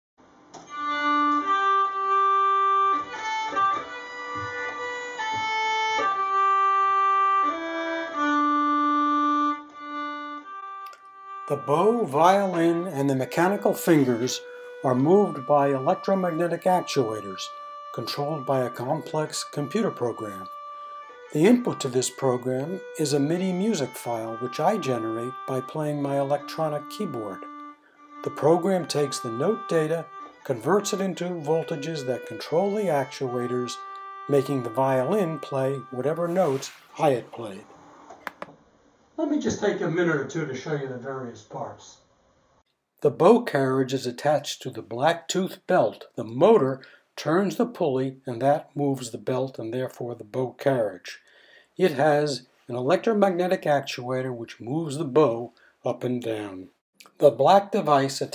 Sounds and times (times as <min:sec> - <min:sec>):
Violin, fiddle: 0:00.6 - 0:37.7
Speech: 0:11.5 - 0:20.5, 0:21.4 - 0:27.5, 0:28.3 - 0:37.6, 0:39.2 - 0:42.0, 0:43.0 - 0:51.2, 0:51.8 - 0:58.3.